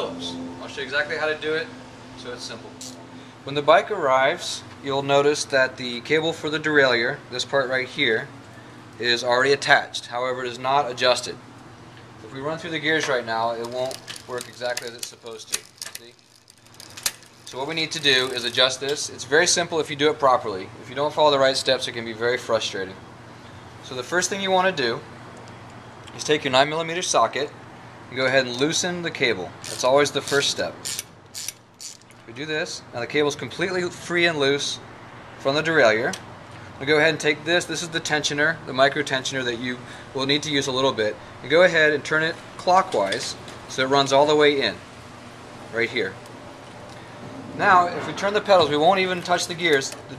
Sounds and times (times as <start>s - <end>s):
Speech: 0.0s - 2.8s, 3.5s - 8.3s, 9.0s - 11.4s, 12.2s - 16.2s, 17.5s - 23.0s, 23.8s - 25.1s, 26.1s - 30.8s, 32.3s - 34.8s, 35.4s - 36.2s, 36.8s - 44.8s, 45.7s - 46.2s, 47.6s - 50.1s
Bicycle: 13.6s - 18.8s, 29.6s - 32.2s.